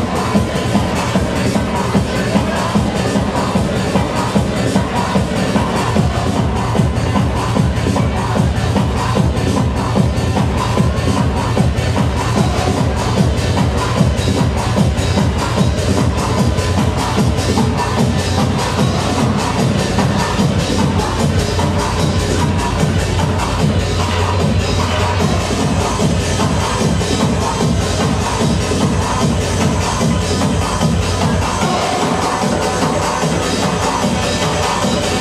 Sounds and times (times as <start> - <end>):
Techno: 0.0 - 35.2.